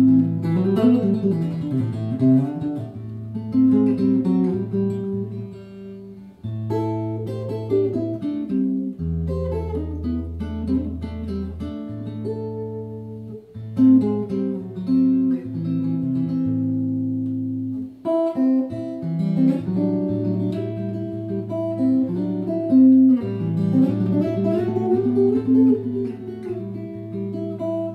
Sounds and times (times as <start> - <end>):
Guitar: 0.0 - 27.9.